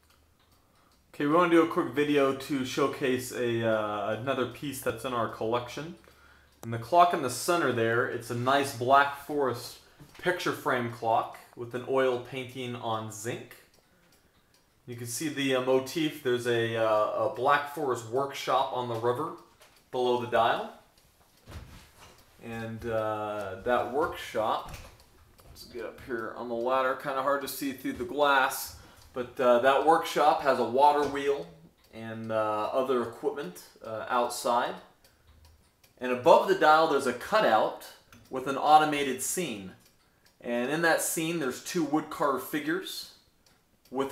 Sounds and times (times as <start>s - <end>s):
Tick-tock: 0.0s - 21.4s, 22.0s - 44.1s
Speech: 1.2s - 6.0s, 6.6s - 13.7s, 14.9s - 20.8s, 22.4s - 24.9s, 25.5s - 34.9s, 36.0s - 39.8s, 40.4s - 43.2s.